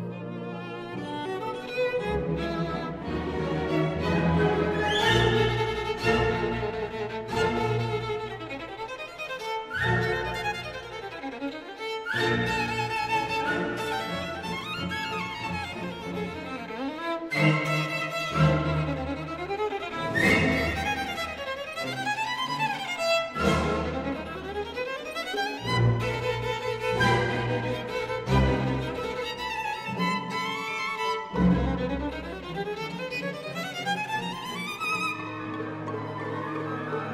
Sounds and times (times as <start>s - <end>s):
Violin, fiddle: 0.0s - 37.1s.